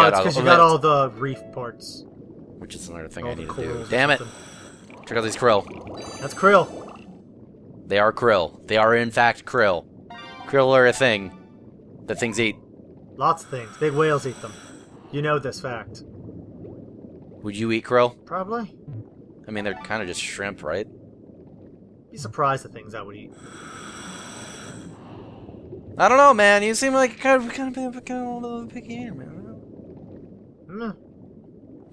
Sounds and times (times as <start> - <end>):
Speech: 0.0 - 2.0, 15.2 - 16.0, 17.4 - 18.7, 19.5 - 20.8, 22.2 - 23.3, 26.0 - 29.6.